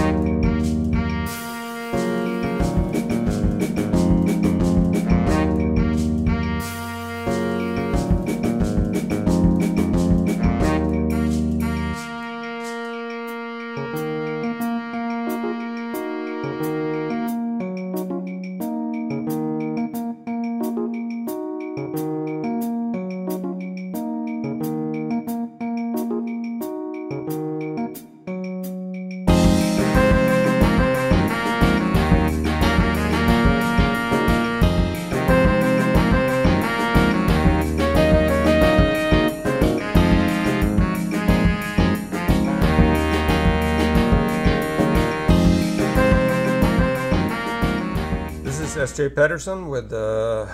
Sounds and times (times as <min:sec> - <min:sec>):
Afrobeat: 0:00.0 - 0:49.1.